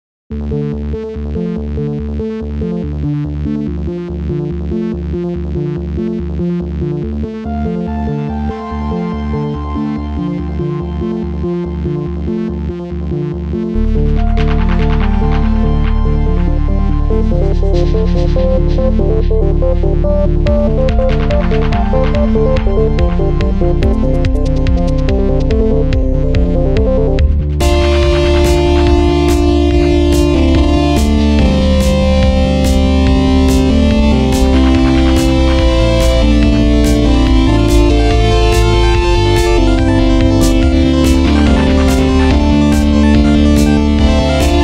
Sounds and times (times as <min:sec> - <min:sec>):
Synthesizer: 0:00.3 - 0:44.6.